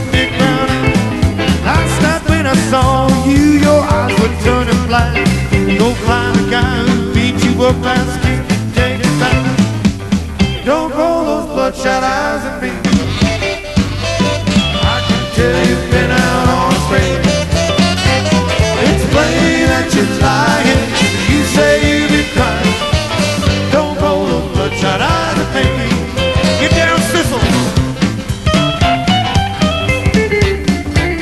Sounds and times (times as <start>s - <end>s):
Jazz: 0.0s - 31.2s.